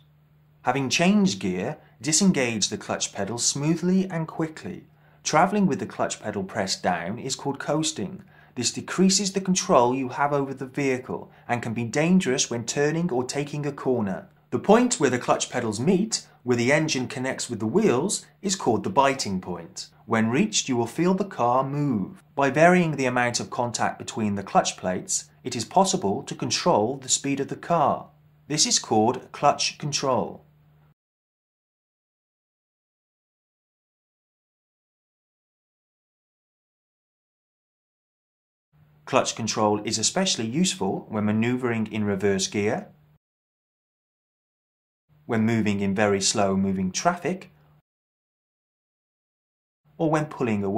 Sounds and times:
Speech: 0:00.7 - 0:30.4, 0:39.1 - 0:43.0, 0:45.3 - 0:47.5, 0:50.0 - 0:50.7.

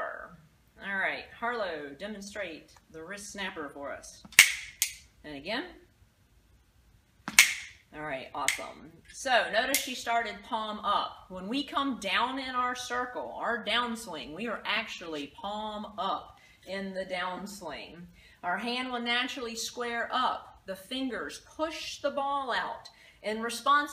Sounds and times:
Speech: 0:00.0 - 0:04.2, 0:05.2 - 0:05.9, 0:07.9 - 0:23.9.

